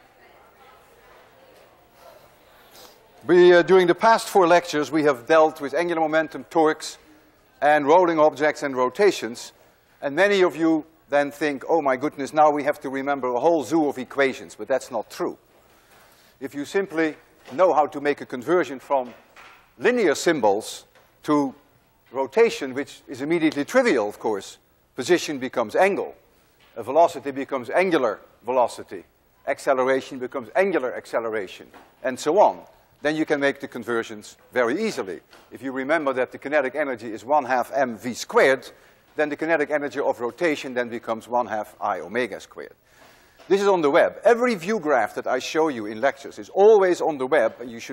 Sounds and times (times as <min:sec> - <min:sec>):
Speech: 0:03.0 - 0:15.4, 0:16.4 - 0:19.2, 0:19.8 - 0:26.2, 0:26.8 - 0:42.8, 0:43.5 - 0:47.9.